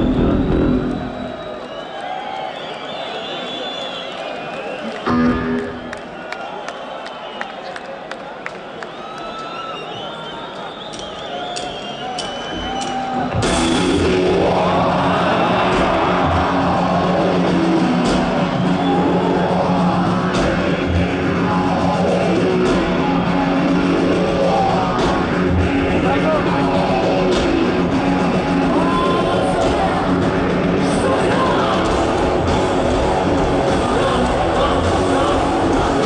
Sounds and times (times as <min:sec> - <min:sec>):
Music: 0:00.0 - 0:01.8, 0:04.8 - 0:06.5, 0:10.7 - 0:36.0.